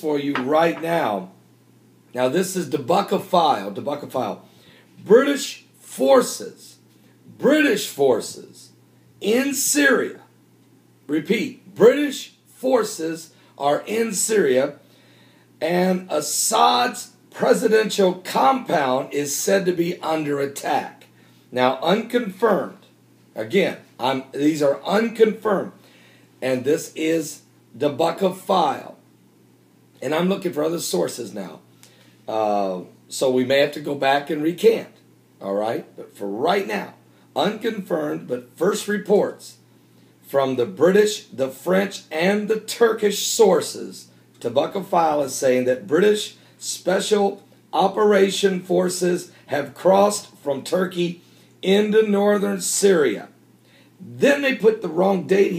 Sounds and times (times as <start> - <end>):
Speech: 0.0 - 1.4, 2.2 - 10.3, 11.1 - 14.8, 15.6 - 25.8, 26.4 - 29.0, 30.0 - 31.7, 32.3 - 39.6, 40.2 - 53.4, 54.0 - 55.5.